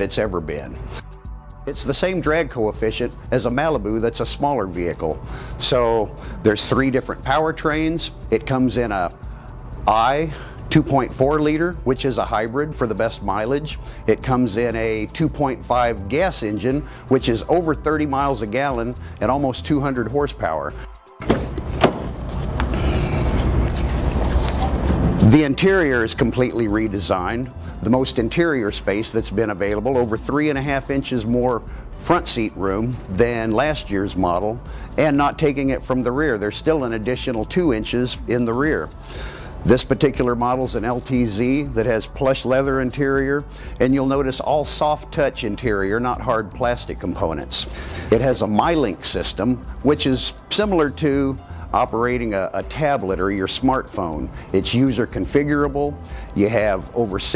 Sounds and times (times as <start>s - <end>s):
Speech: 0.0s - 0.8s, 1.7s - 9.2s, 9.9s - 20.7s, 25.2s - 38.9s, 39.7s - 57.3s.